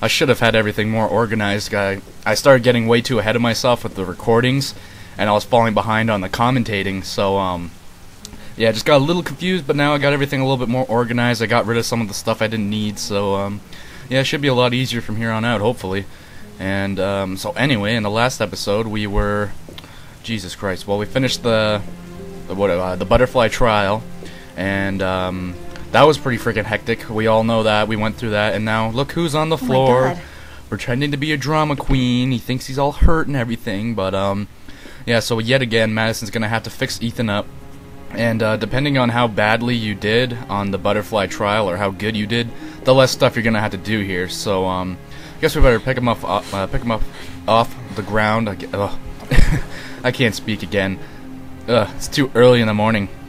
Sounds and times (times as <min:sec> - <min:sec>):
Speech: 0:00.0 - 0:07.8, 0:08.6 - 0:19.6, 0:20.2 - 0:21.9, 0:22.5 - 0:34.5, 0:35.1 - 0:37.5, 0:38.1 - 0:49.0, 0:50.0 - 0:51.0, 0:51.7 - 0:53.1
Music: 0:00.0 - 0:53.2.